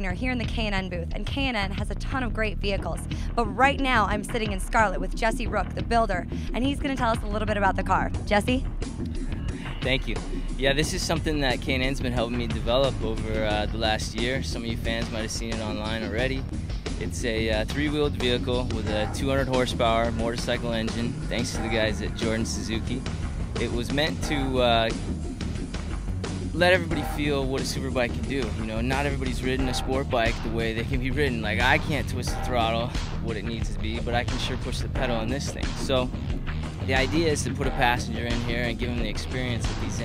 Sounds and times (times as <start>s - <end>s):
Speech: 0.0s - 8.6s, 9.8s - 16.4s, 17.0s - 23.0s, 23.6s - 25.0s, 26.6s - 36.2s, 36.8s - 40.0s
Music: 0.0s - 40.0s.